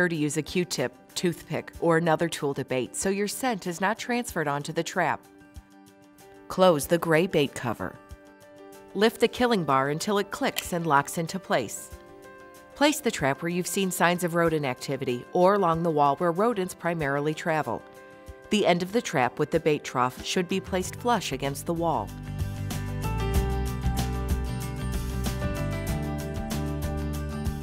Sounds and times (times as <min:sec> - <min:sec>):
Speech: 0:00.0 - 0:05.2, 0:06.5 - 0:08.0, 0:09.0 - 0:11.9, 0:12.8 - 0:17.8, 0:18.5 - 0:22.1
Music: 0:00.0 - 0:27.6.